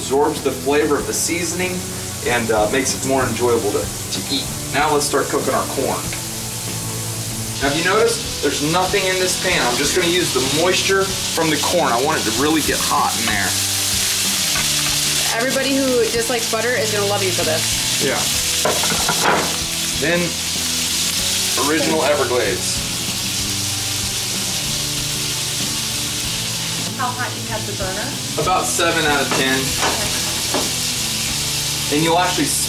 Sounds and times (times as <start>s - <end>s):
Sizzle: 0.0s - 32.6s.